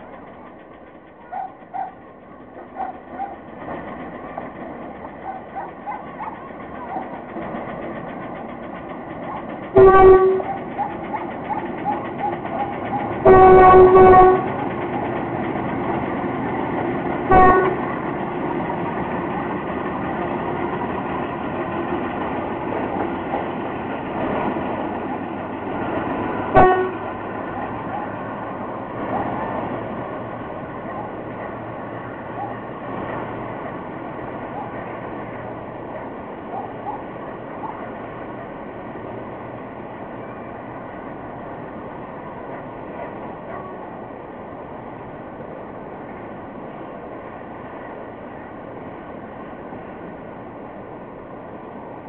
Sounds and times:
Railroad car, train wagon: 0:00.0 - 0:52.0
Train: 0:00.0 - 0:52.0.

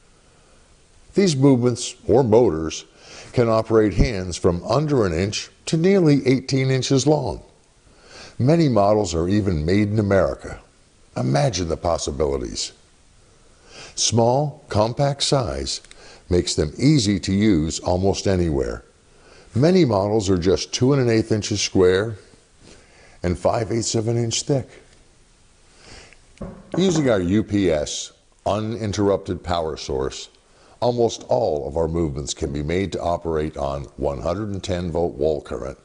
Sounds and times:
Speech: 0:01.2 - 0:07.6, 0:08.4 - 0:12.8, 0:14.0 - 0:18.9, 0:19.5 - 0:22.3, 0:23.2 - 0:24.9, 0:26.8 - 0:35.8.

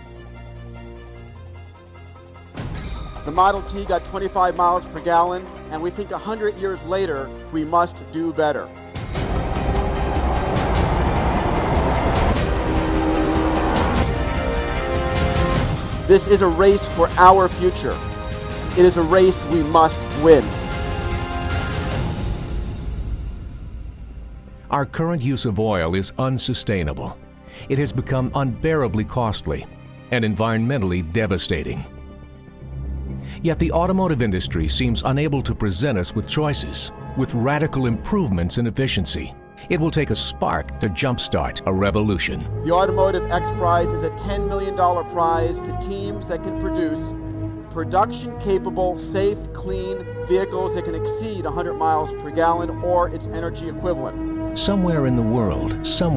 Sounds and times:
Music: 0:00.0 - 0:56.1
Speech: 0:03.2 - 0:08.7, 0:16.1 - 0:18.0, 0:18.8 - 0:20.5, 0:24.7 - 0:31.9, 0:33.4 - 0:47.1, 0:47.8 - 0:56.1.

